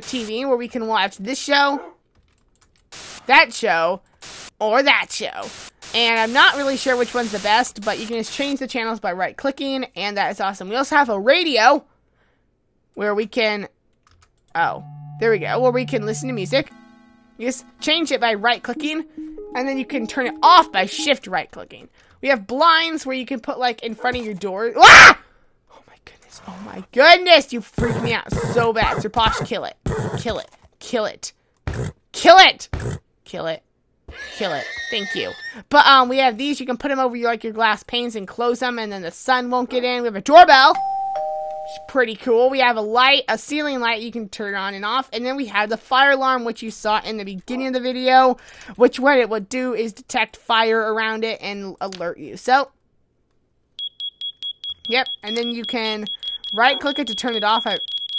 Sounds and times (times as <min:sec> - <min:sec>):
Speech: 0:04.6 - 0:11.8, 0:13.0 - 0:13.7, 0:14.6 - 0:16.7, 0:17.4 - 0:24.9, 0:26.4 - 0:31.3, 0:32.2 - 0:32.7, 0:33.3 - 0:33.6, 0:34.4 - 0:40.8, 0:41.8 - 0:52.8, 0:54.9 - 0:57.8
Ding-dong: 0:40.8 - 0:42.0.